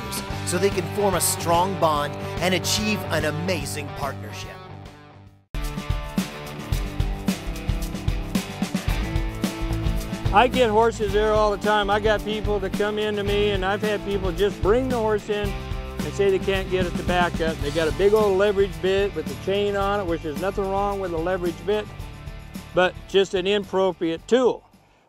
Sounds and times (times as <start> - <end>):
Speech: 0.0 - 4.6, 10.3 - 21.9, 22.8 - 24.6
Music: 0.0 - 25.0.